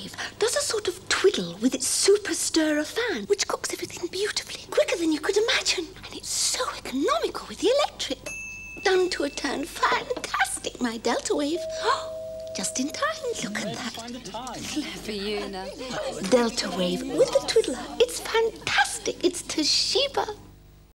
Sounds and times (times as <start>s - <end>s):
Speech: 0.0s - 8.2s, 12.6s - 20.4s.